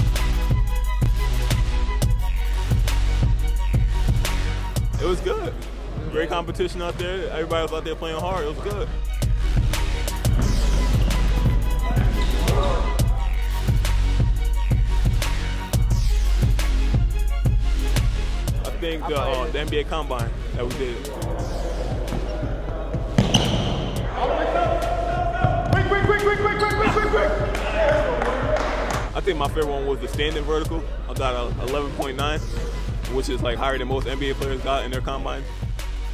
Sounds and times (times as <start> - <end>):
Music: 0.0 - 36.1
Speech: 18.6 - 21.2, 29.2 - 32.4, 33.1 - 35.5.